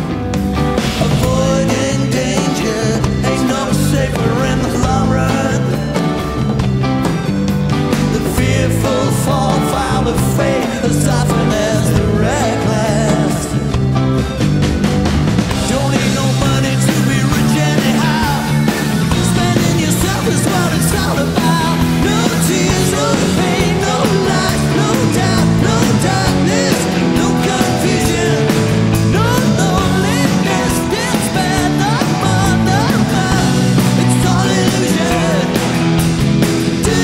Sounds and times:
Independent music: 0.0 - 37.0
Progressive rock: 0.0 - 37.0.

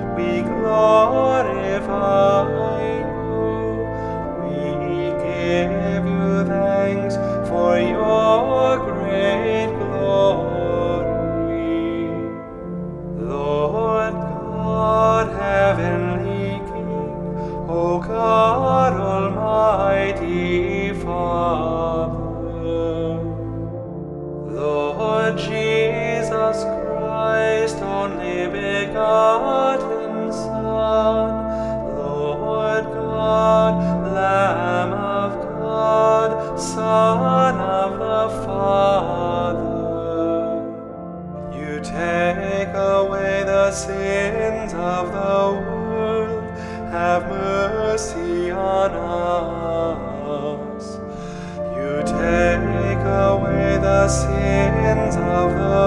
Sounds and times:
Music: 0.0 - 55.8.

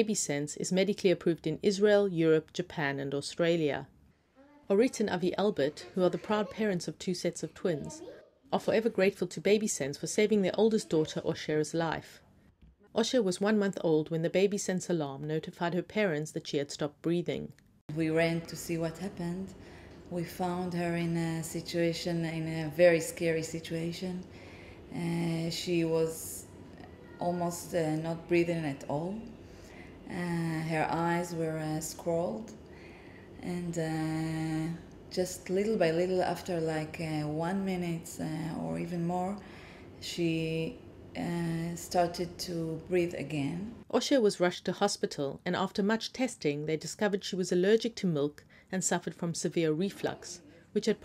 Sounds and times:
Speech: 0.0 - 3.9, 4.7 - 12.2, 13.0 - 24.3, 24.9 - 29.3, 30.1 - 32.6, 33.4 - 39.4, 40.0 - 51.0.

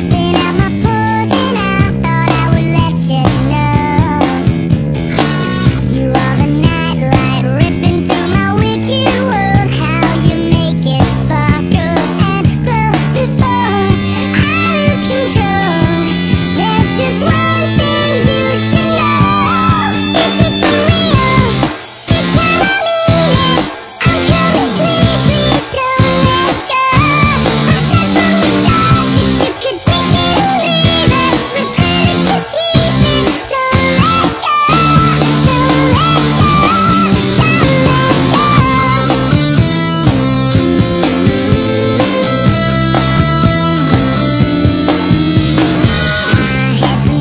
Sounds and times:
Music: 0.0 - 47.2.

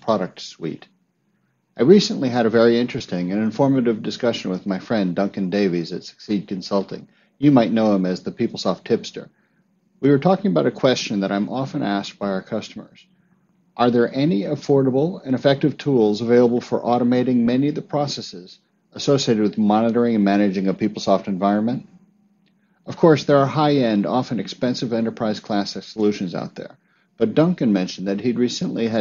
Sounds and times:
Speech: 0.0 - 1.0, 1.8 - 9.3, 10.0 - 13.1, 13.8 - 22.0, 22.9 - 29.0.

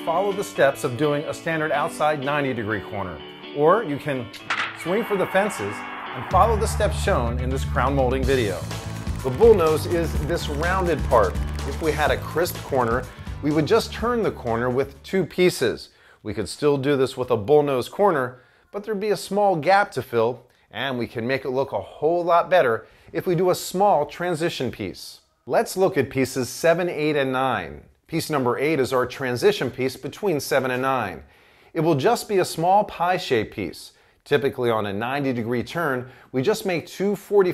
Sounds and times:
Speech: 0.0 - 37.5.

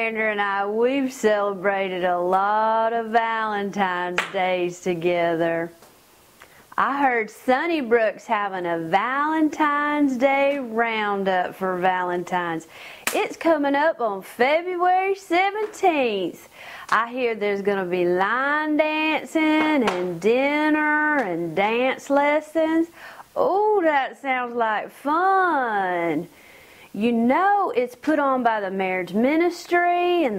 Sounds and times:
Speech: 0.0 - 5.8, 6.8 - 26.3, 27.0 - 30.3.

